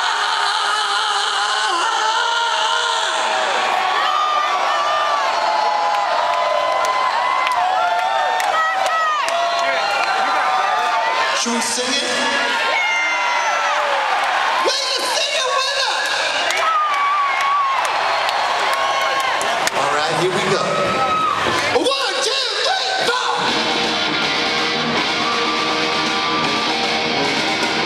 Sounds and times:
Inside, large room or hall: 0:00.0 - 0:27.8
Speech: 0:11.4 - 0:12.5, 0:14.7 - 0:16.5, 0:19.8 - 0:20.9, 0:21.7 - 0:23.5.

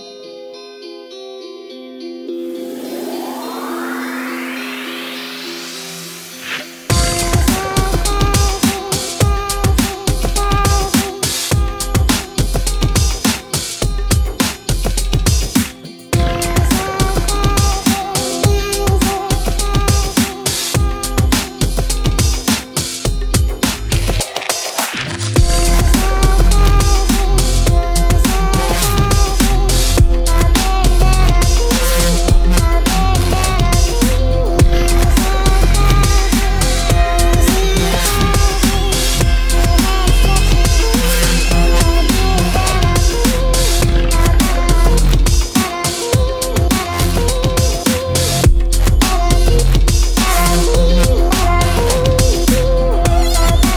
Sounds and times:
Drum and bass: 0:02.7 - 0:53.7.

